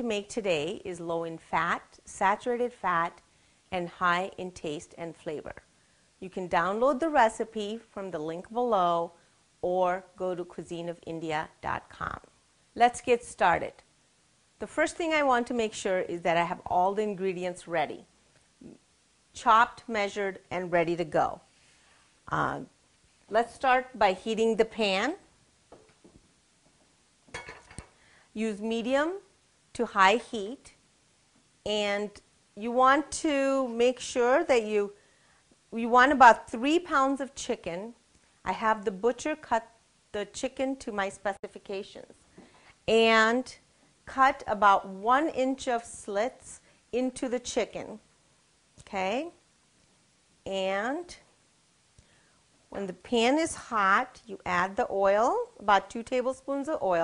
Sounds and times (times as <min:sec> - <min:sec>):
Speech: 0:00.0 - 0:03.2, 0:03.8 - 0:05.6, 0:06.2 - 0:13.8, 0:14.6 - 0:18.8, 0:19.4 - 0:21.5, 0:22.3 - 0:22.7, 0:23.3 - 0:25.3, 0:28.4 - 0:30.8, 0:31.7 - 0:35.0, 0:35.8 - 0:42.2, 0:42.9 - 0:48.0, 0:48.8 - 0:49.4, 0:50.5 - 0:51.3, 0:52.7 - 0:57.0.